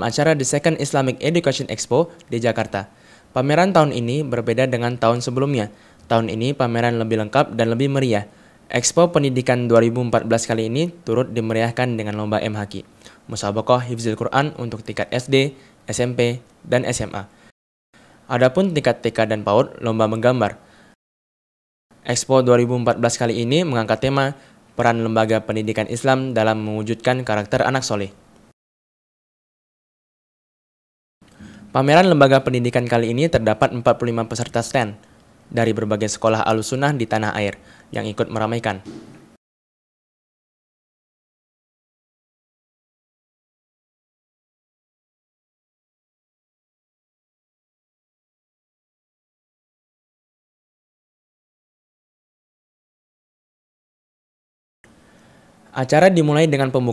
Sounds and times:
Speech: 0.0s - 17.3s, 18.3s - 20.6s, 22.0s - 28.2s, 31.4s - 39.0s, 55.7s - 56.9s.

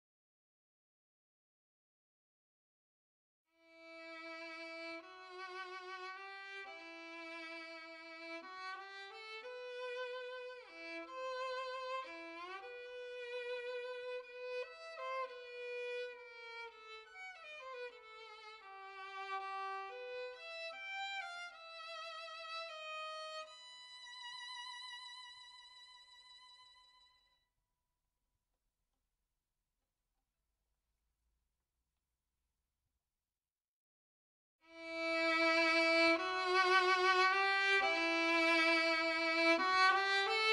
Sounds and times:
Violin, fiddle: 3.6s - 27.3s, 34.7s - 40.5s.

